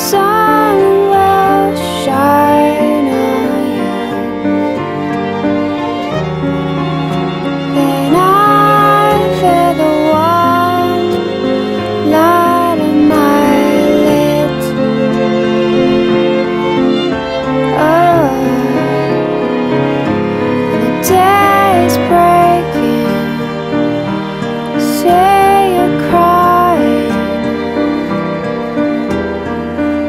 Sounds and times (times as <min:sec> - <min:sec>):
Music: 0:00.0 - 0:30.0.